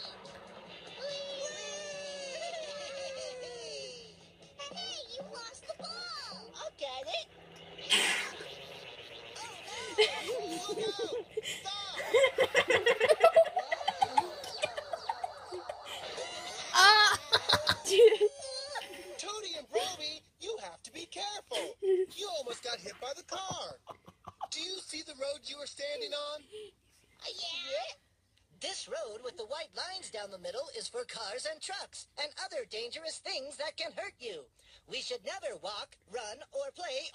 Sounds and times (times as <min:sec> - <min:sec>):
Speech: 0:09.4 - 0:12.1, 0:17.9 - 0:23.8, 0:24.5 - 0:26.6, 0:28.6 - 0:37.1.